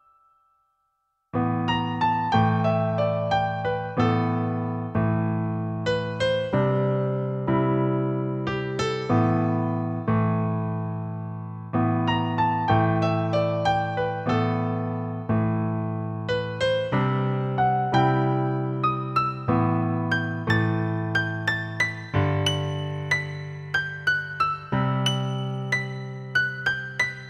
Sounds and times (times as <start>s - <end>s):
Music: 0.0s - 27.2s.